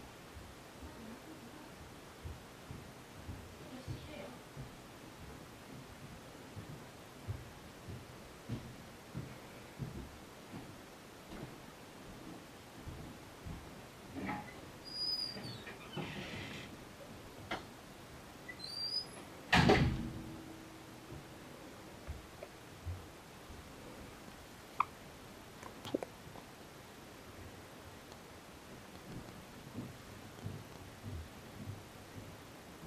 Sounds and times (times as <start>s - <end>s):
Speech: 0.8s - 1.8s, 3.6s - 4.5s.